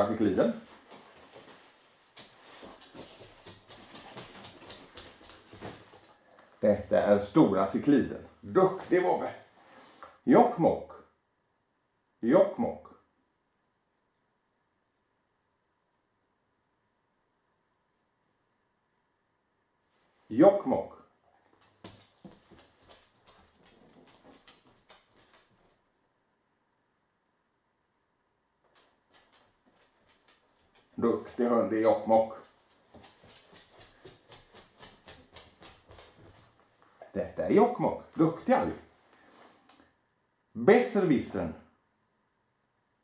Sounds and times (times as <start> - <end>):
Speech: 0.0 - 0.7, 6.6 - 9.5, 10.2 - 11.1, 12.2 - 13.0, 20.3 - 21.1, 31.0 - 32.5, 37.0 - 38.9, 40.6 - 41.7.